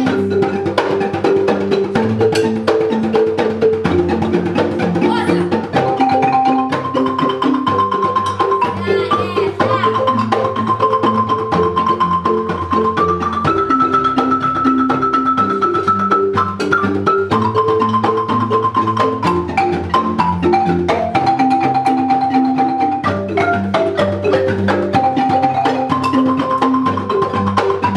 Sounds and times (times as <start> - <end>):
Marimba, xylophone: 0.0 - 27.9
Child speech, kid speaking: 5.0 - 5.6, 8.7 - 10.1.